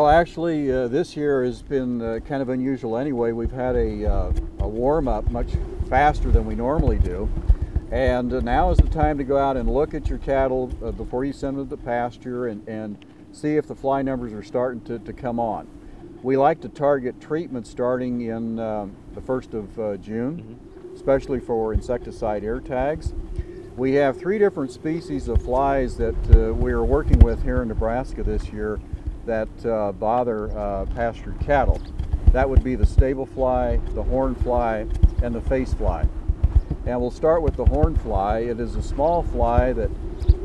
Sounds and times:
Speech: 0:00.0 - 0:07.3, 0:07.9 - 0:15.6, 0:16.2 - 0:23.1, 0:23.8 - 0:31.8, 0:32.4 - 0:36.1, 0:36.9 - 0:39.9.

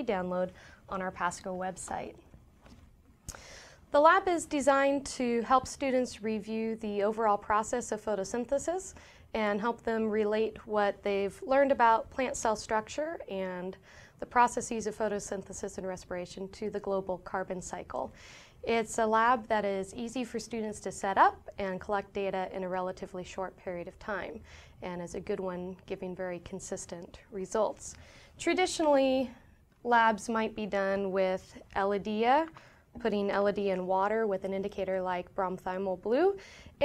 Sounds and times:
Speech: 0:00.0 - 0:02.2, 0:03.9 - 0:36.8.

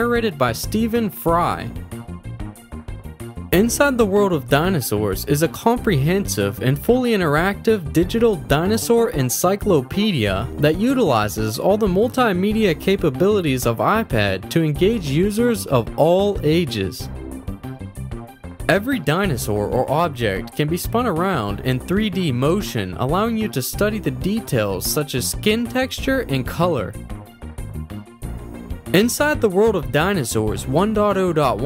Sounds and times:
Speech: 0:00.0 - 0:01.8, 0:03.5 - 0:17.1, 0:18.7 - 0:27.0, 0:28.9 - 0:31.6
Music: 0:00.0 - 0:31.6.

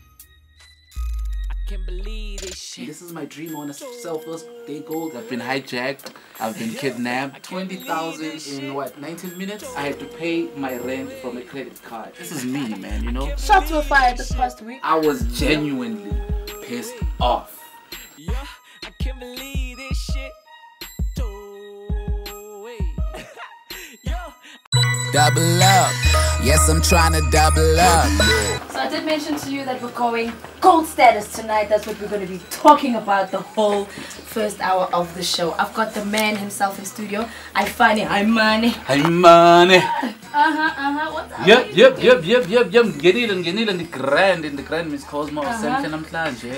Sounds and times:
Music: 0:00.0 - 0:46.5
Speech: 0:01.9 - 0:17.5.

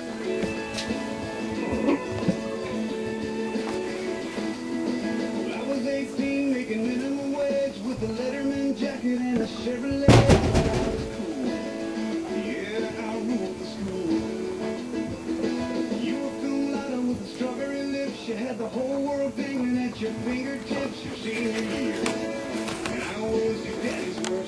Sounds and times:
Music: 0:00.0 - 0:24.4.

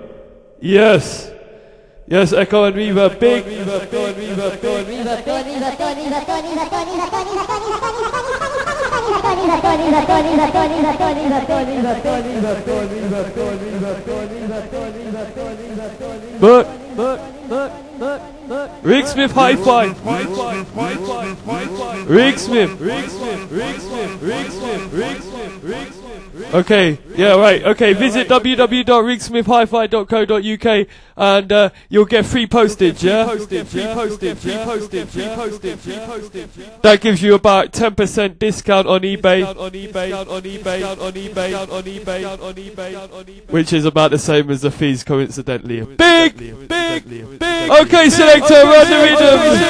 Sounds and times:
Speech: 0:00.0 - 0:01.3, 0:02.1 - 0:05.5, 0:11.8 - 0:17.7, 0:18.9 - 0:25.9, 0:26.5 - 0:39.6, 0:43.5 - 0:49.7.

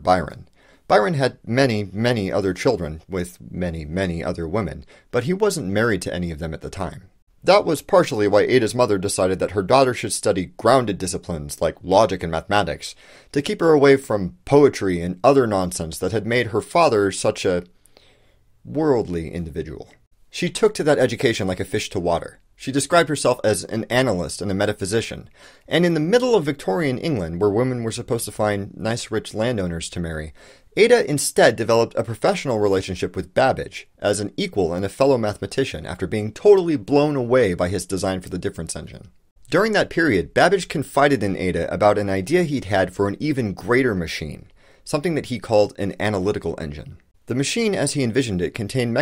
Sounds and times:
Speech: 0:00.0 - 0:17.7, 0:18.6 - 0:49.0.

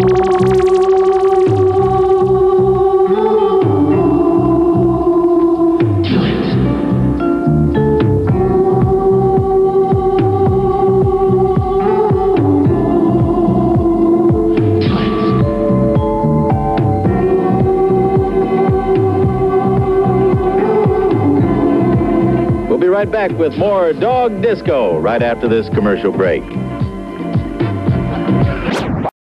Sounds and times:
Disco: 0:00.0 - 0:29.1
Speech: 0:22.7 - 0:26.6.

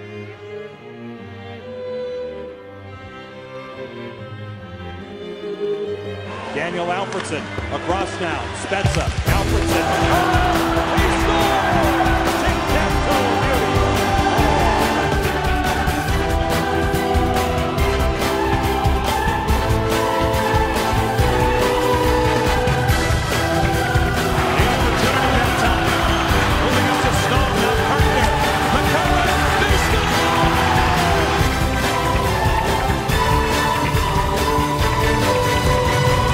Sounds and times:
Music: 0:00.0 - 0:36.3
Speech: 0:06.5 - 0:13.8.

